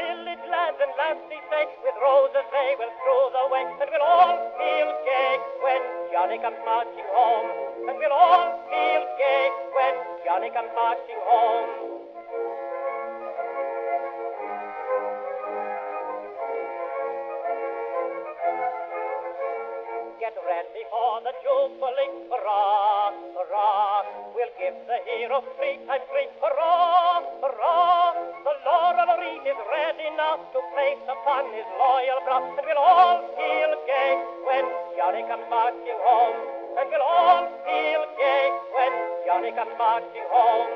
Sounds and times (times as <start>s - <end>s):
Music: 0.0s - 40.7s.